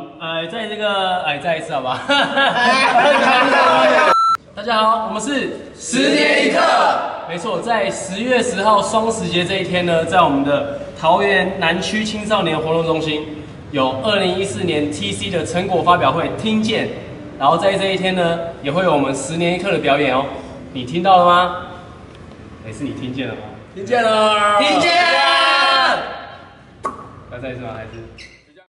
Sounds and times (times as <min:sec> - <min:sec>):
Speech: 0:00.0 - 0:02.0, 0:02.7 - 0:05.6, 0:07.3 - 0:21.6, 0:27.3 - 0:28.6.